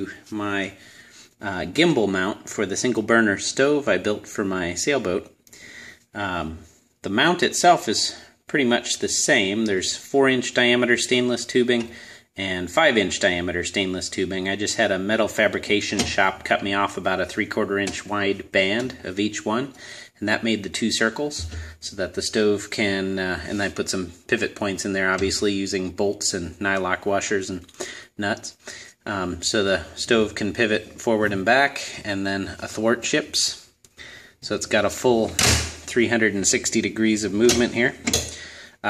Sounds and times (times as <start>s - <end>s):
Speech: 0.0s - 0.8s, 1.4s - 5.4s, 6.1s - 33.7s, 34.4s - 38.8s.